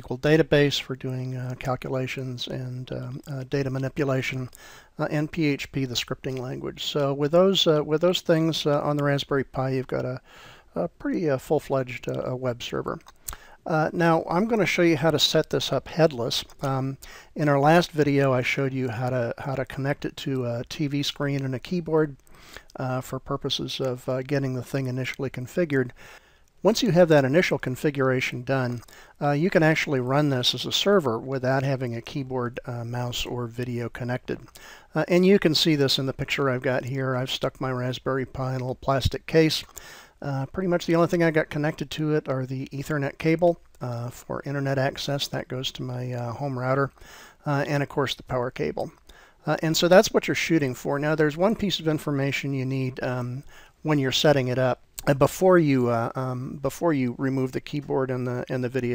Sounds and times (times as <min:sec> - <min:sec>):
Speech: 0:00.0 - 0:22.2, 0:22.8 - 0:26.0, 0:26.6 - 0:58.9.